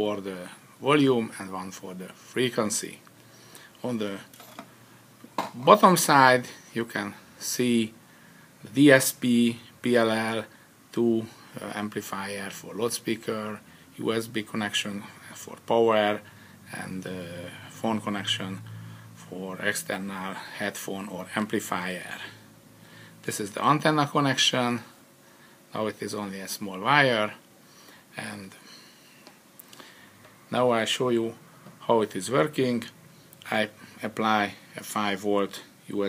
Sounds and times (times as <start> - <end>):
Speech: 0.0 - 3.1, 3.8 - 4.3, 5.5 - 8.0, 8.6 - 22.4, 23.2 - 24.9, 25.7 - 27.4, 28.1 - 28.6, 30.5 - 36.0.